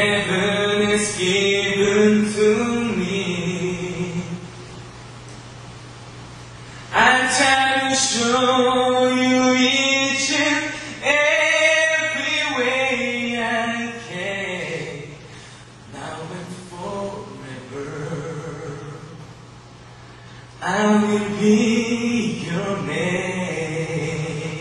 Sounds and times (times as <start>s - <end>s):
Male singing: 0.0s - 4.5s, 6.9s - 15.3s, 15.9s - 19.2s, 20.6s - 24.6s.